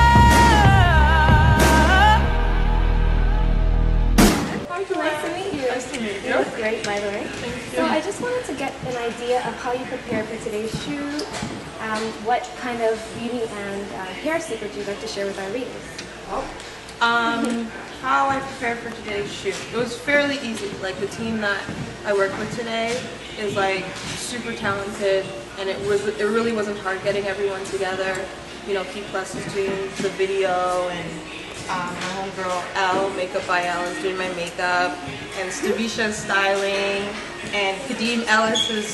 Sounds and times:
Speech: 4.7s - 38.9s.

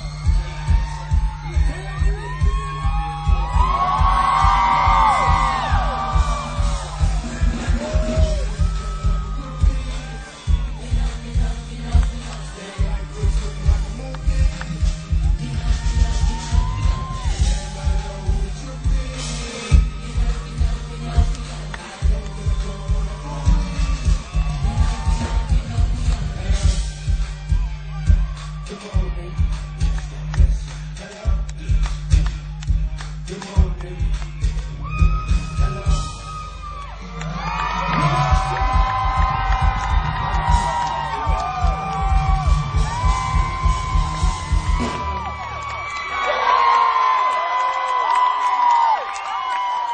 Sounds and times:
Music: 0.0s - 46.1s.

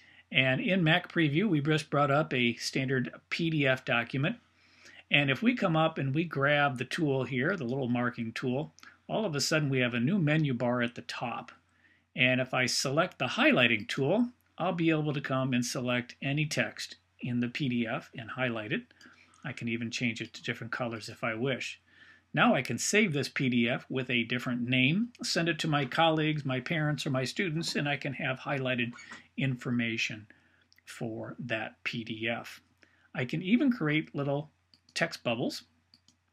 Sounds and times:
Speech: 0.3s - 4.4s, 5.0s - 11.6s, 12.2s - 21.8s, 22.4s - 30.3s, 30.9s - 32.6s, 33.2s - 35.6s.

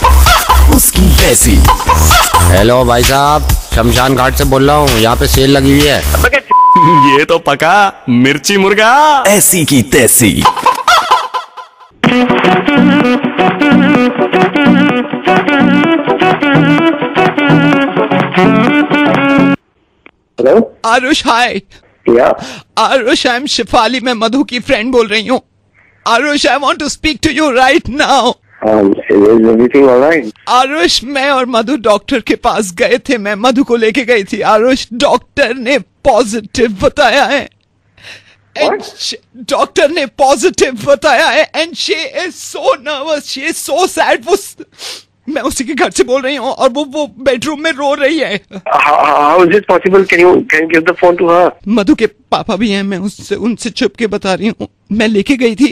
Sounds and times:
Speech: 2.5s - 10.5s, 26.1s - 37.5s.

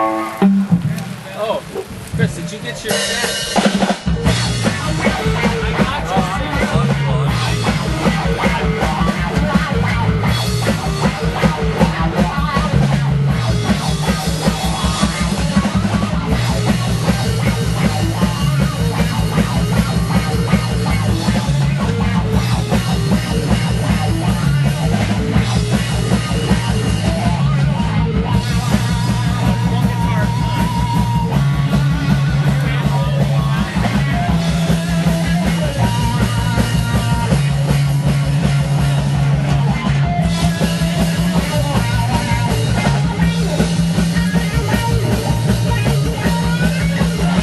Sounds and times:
Music: 0.0s - 47.4s.

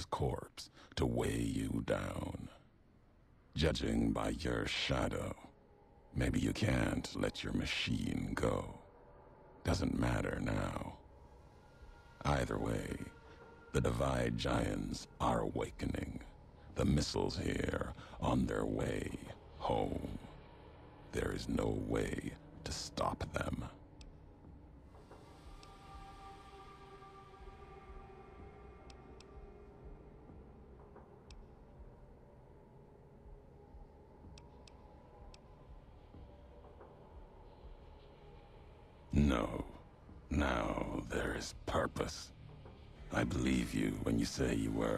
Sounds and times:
Male speech, man speaking: 0.0s - 2.6s, 3.6s - 5.5s, 6.1s - 8.9s, 9.7s - 11.0s, 12.2s - 13.2s, 13.8s - 20.4s, 21.1s - 23.8s, 39.1s - 42.3s, 43.1s - 44.9s
Speech synthesizer: 0.0s - 2.6s, 3.6s - 5.5s, 6.2s - 8.8s, 9.7s - 11.0s, 12.2s - 13.2s, 13.8s - 20.3s, 21.2s - 23.8s, 39.2s - 42.3s, 43.1s - 44.9s
Narration, monologue: 0.0s - 44.9s.

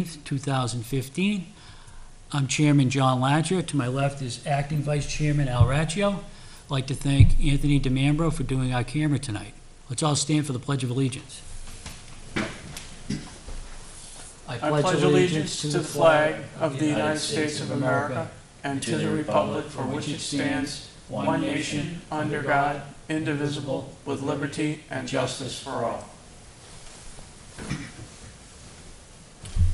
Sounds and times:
Speech: 0.0s - 1.5s, 2.3s - 11.4s, 14.5s - 26.2s.

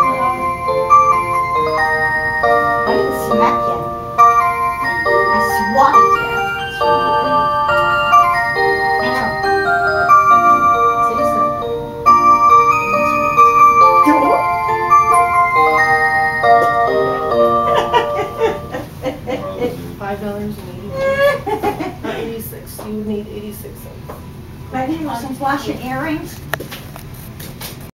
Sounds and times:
Speech: 19.4s - 21.4s, 22.1s - 24.1s, 24.7s - 26.4s.

